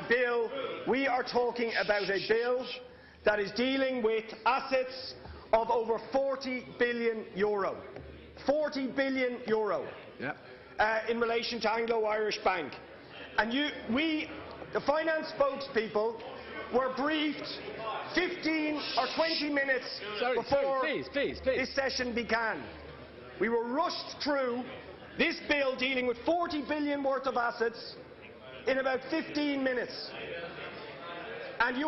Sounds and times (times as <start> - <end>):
Narration, monologue: 0.0 - 30.2
Male speech, man speaking: 0.0 - 31.8.